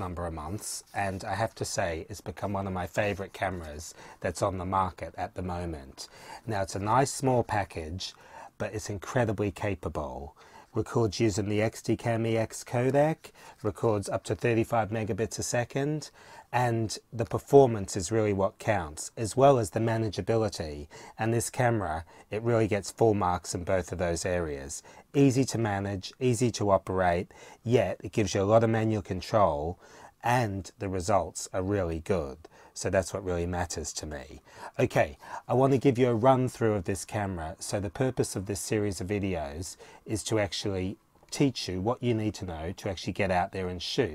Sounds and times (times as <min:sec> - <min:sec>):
Speech: 0:00.0 - 0:44.1.